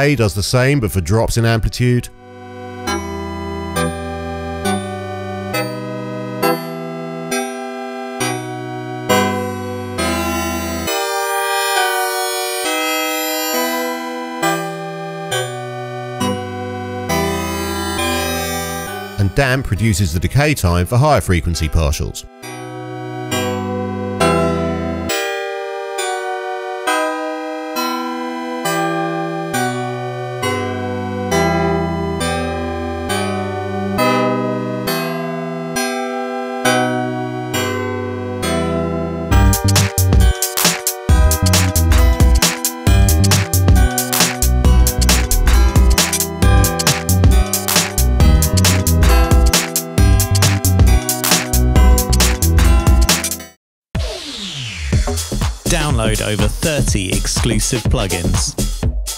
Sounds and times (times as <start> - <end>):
Synthesizer: 1.3 - 58.8.